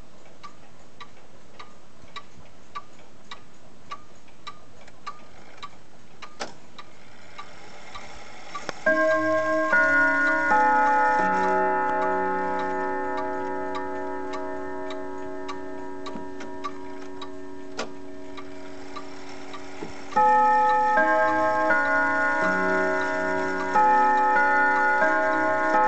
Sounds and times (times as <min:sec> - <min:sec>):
Tick-tock: 0:00.0 - 0:25.8.